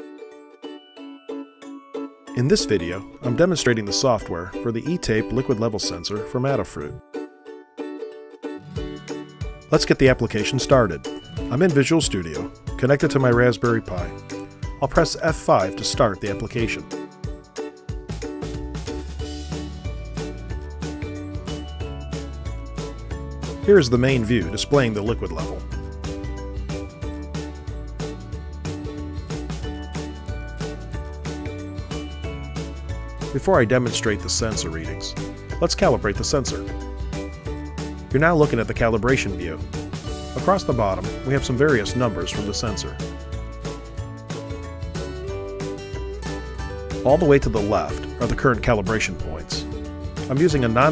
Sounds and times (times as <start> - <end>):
Music: 0.0 - 50.9
Speech: 2.4 - 7.0, 9.7 - 14.2, 14.8 - 16.9, 23.7 - 25.6, 33.3 - 36.7, 38.1 - 39.6, 40.4 - 43.0, 47.0 - 49.7, 50.3 - 50.9.